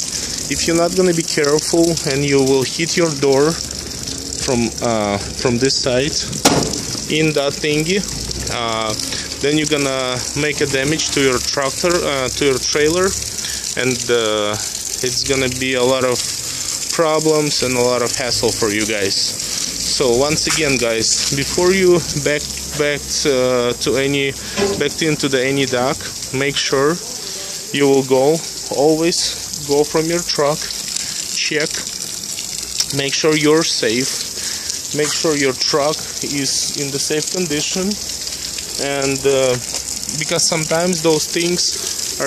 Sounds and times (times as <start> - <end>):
Speech: 0.5 - 3.6, 4.4 - 6.3, 7.1 - 16.3, 16.9 - 30.7, 31.4 - 31.9, 32.8 - 34.2, 34.9 - 38.0, 38.8 - 42.2.